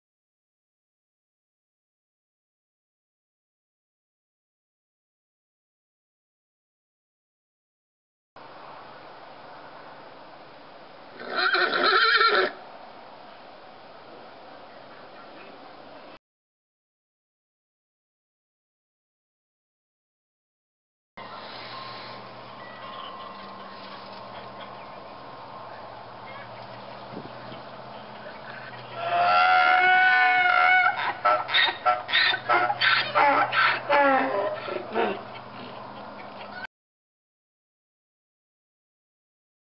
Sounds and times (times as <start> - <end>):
Animal: 21.3 - 25.0, 27.5 - 36.7.